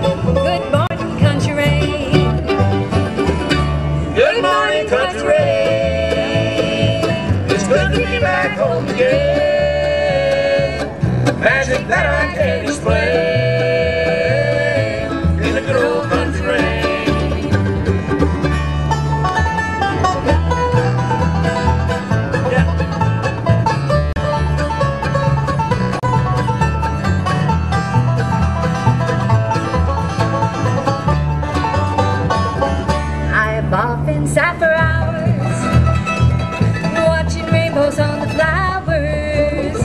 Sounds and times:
Bluegrass: 0.0 - 39.8.

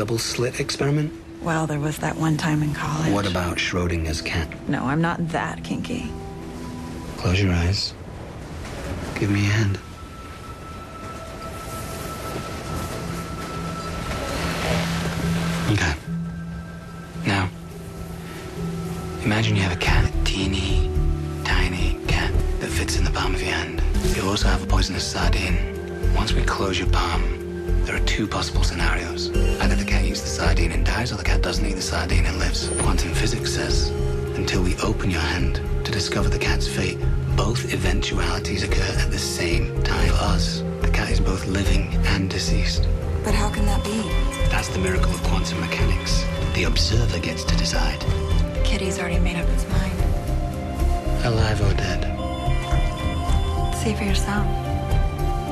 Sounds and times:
Music: 0.0 - 55.5.

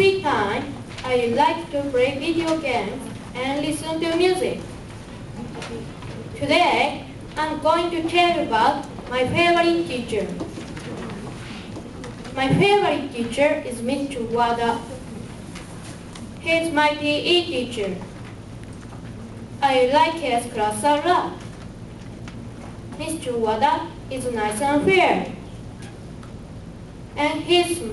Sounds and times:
Child speech, kid speaking: 0.0 - 4.7, 6.4 - 10.4, 12.4 - 15.0, 16.4 - 18.1, 19.6 - 21.4, 23.0 - 25.4, 27.2 - 27.9
Narration, monologue: 0.0 - 27.9.

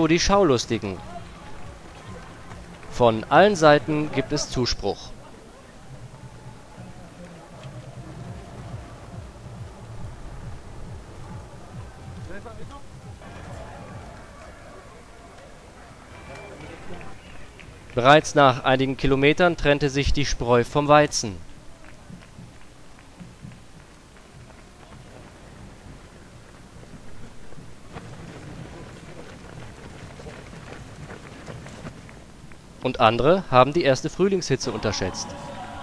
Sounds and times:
Speech: 0.0 - 5.8, 18.0 - 21.4, 32.8 - 35.8
Run: 0.0 - 35.8.

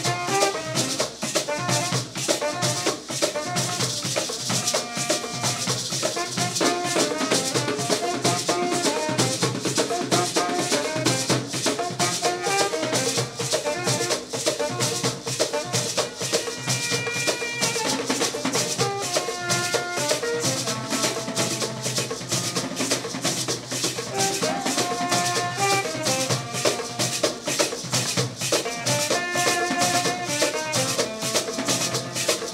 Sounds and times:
Drum: 0.0 - 32.5.

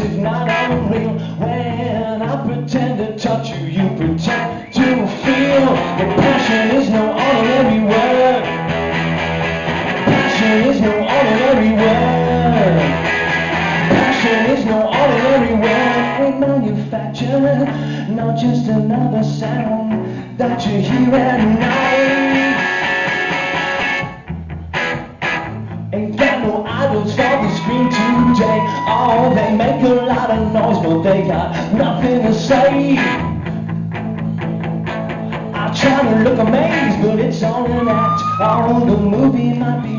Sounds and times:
Independent music: 0.0 - 39.9.

